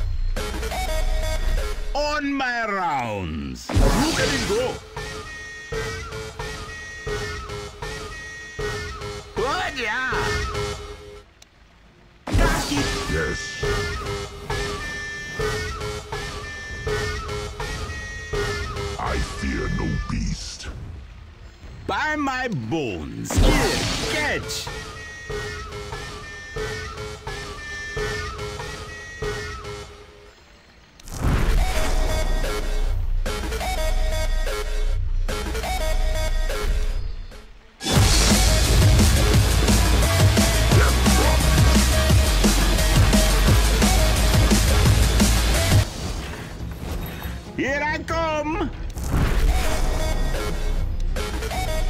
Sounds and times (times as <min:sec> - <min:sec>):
Music: 0:00.0 - 0:20.3, 0:24.2 - 0:51.9
Sound effect: 0:03.7 - 0:09.2, 0:23.3 - 0:29.9, 0:48.9 - 0:51.9
Speech: 0:09.4 - 0:10.4, 0:19.0 - 0:20.8, 0:21.9 - 0:24.8, 0:47.6 - 0:48.8.